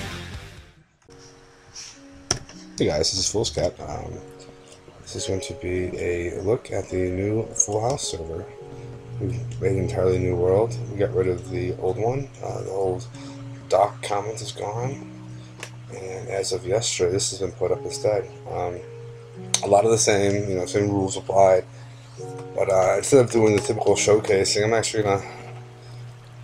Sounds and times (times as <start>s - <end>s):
Music: 0.0s - 26.4s
Speech: 2.8s - 4.2s, 5.1s - 8.5s, 9.2s - 13.1s, 13.7s - 15.0s, 15.9s - 18.8s, 19.6s - 21.6s, 22.6s - 25.4s.